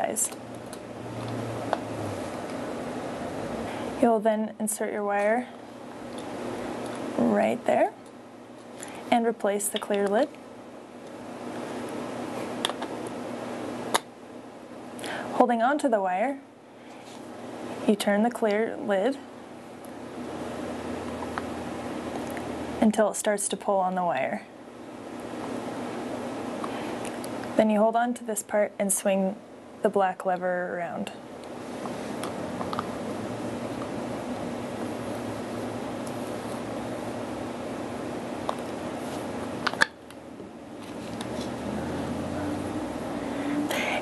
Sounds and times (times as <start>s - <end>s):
Speech: 0.0s - 0.4s, 4.0s - 5.5s, 7.2s - 8.0s, 9.1s - 10.3s, 15.4s - 16.5s, 17.9s - 19.3s, 22.8s - 24.5s, 27.6s - 31.2s.